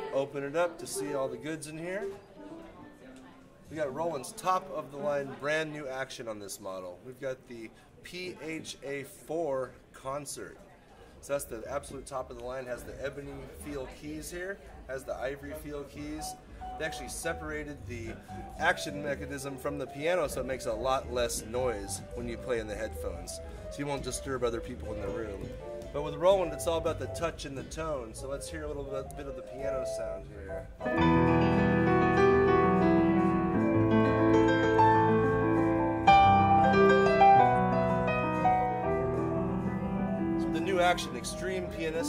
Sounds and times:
Speech: 0.0s - 30.7s, 40.4s - 42.0s.

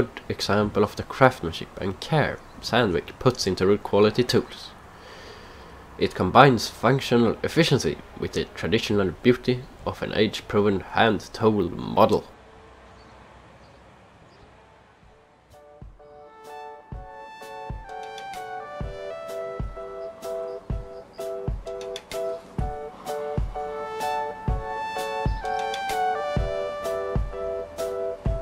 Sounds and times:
Speech: 0.0s - 4.8s, 6.0s - 12.4s
Music: 15.1s - 28.4s.

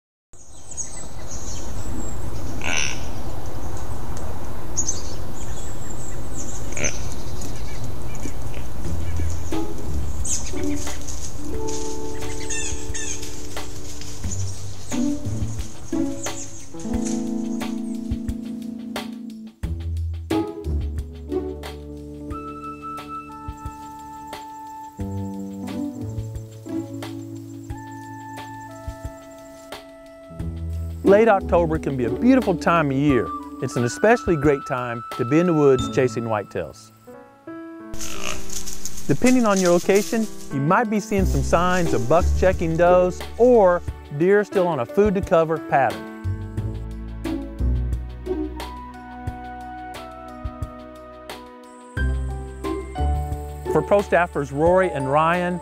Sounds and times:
Music: 6.4s - 55.6s.

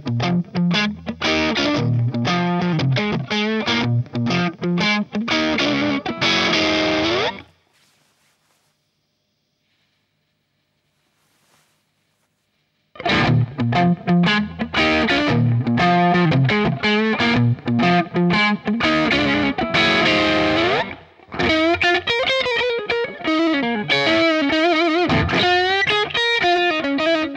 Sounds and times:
Music: 0.0s - 7.4s, 13.0s - 27.3s.

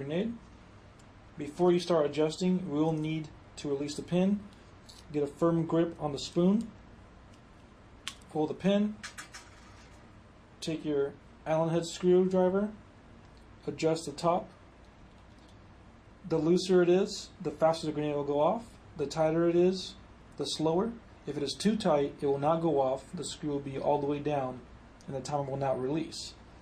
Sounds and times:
Speech: 0.0s - 0.4s, 1.4s - 4.5s, 5.1s - 6.8s, 8.3s - 9.0s, 10.6s - 12.8s, 13.6s - 14.6s, 16.2s - 26.4s.

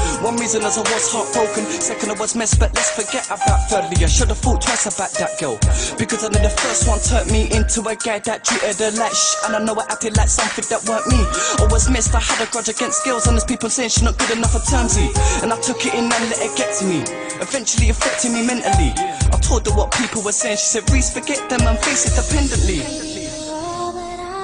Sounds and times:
Rhythm and blues: 0.0s - 24.2s.

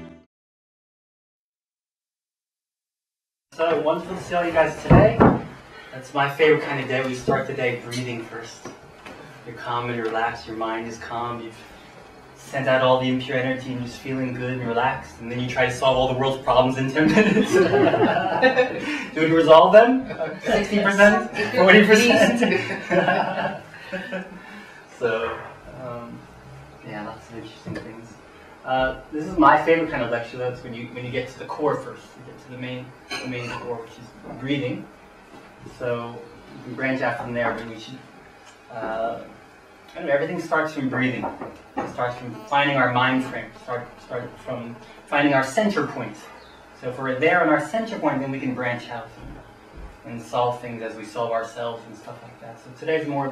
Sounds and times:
Speech: 3.5s - 8.8s, 9.4s - 11.6s, 12.4s - 17.8s, 18.6s - 22.8s, 25.0s - 26.2s, 26.8s - 34.9s, 35.7s - 38.1s, 38.7s - 49.4s, 50.0s - 53.3s.

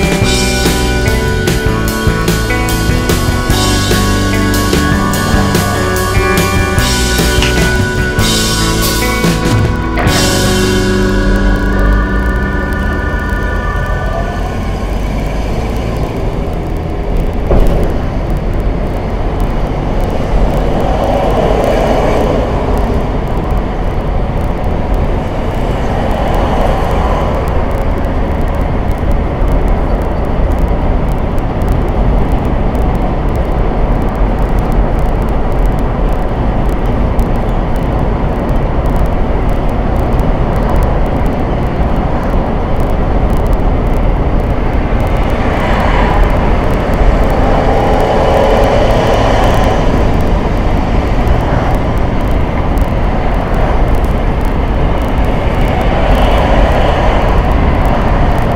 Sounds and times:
Music: 0.0s - 14.9s
Car: 0.0s - 58.5s.

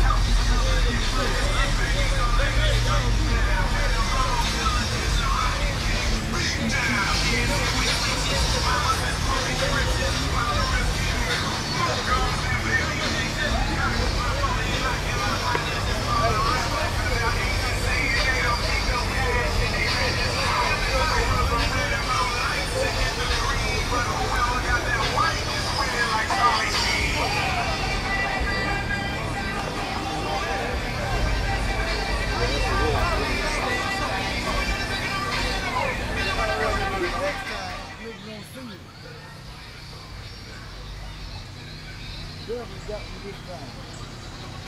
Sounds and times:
Music: 0.0s - 44.6s
Speech: 0.0s - 44.6s.

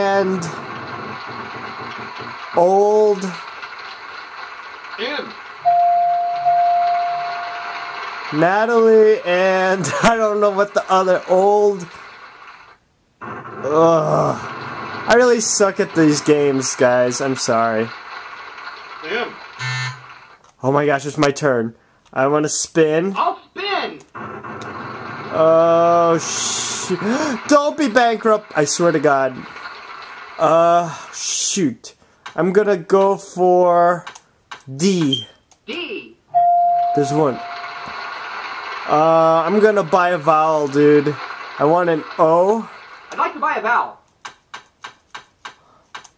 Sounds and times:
Speech: 0.0s - 0.6s, 2.6s - 3.4s, 5.0s - 5.4s, 8.4s - 11.9s, 13.7s - 14.4s, 15.1s - 17.9s, 19.0s - 19.4s, 20.6s - 24.1s, 25.4s - 29.5s, 30.4s - 34.1s, 34.7s - 36.2s, 37.0s - 37.4s, 38.9s - 44.0s.

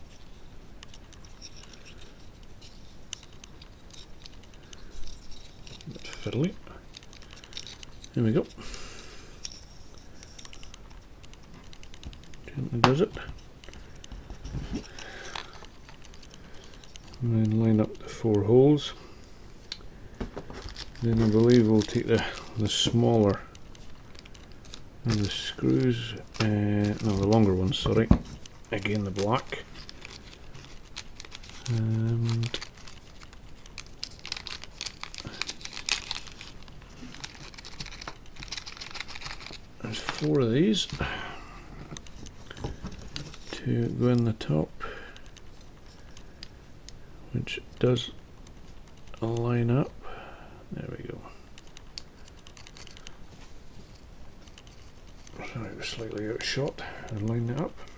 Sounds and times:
Crumpling, crinkling: 0.0s - 19.0s, 19.6s - 46.6s, 51.0s - 57.9s
Speech: 8.2s - 8.5s, 17.2s - 19.0s, 21.0s - 23.5s, 25.1s - 29.6s, 39.8s - 41.0s, 43.6s - 44.7s, 47.3s - 48.2s, 49.2s - 49.9s, 50.7s - 51.4s, 55.4s - 57.8s.

